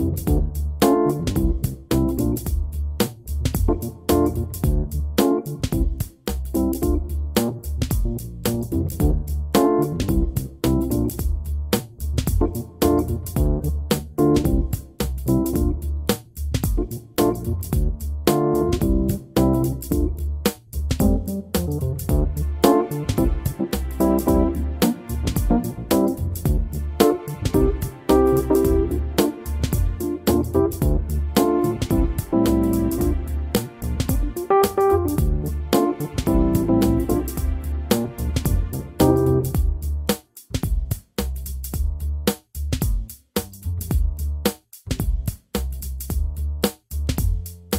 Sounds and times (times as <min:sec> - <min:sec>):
Music: 0:00.0 - 0:47.7.